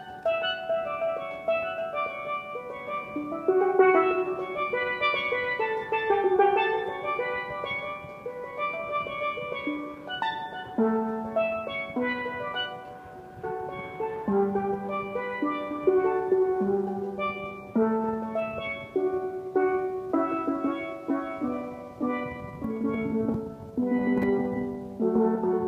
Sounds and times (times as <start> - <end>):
Steelpan: 0.0 - 25.6.